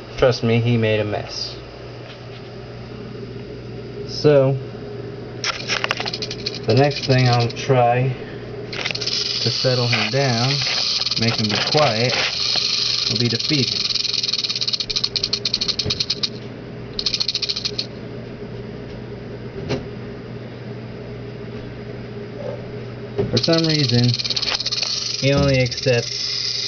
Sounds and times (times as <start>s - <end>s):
Speech: 0.2s - 1.6s, 4.1s - 4.6s, 6.7s - 8.2s, 9.5s - 10.6s, 11.2s - 12.2s, 13.1s - 13.8s, 25.2s - 26.1s
Snake: 5.4s - 7.6s, 8.7s - 16.3s, 17.0s - 17.9s, 23.4s - 26.6s.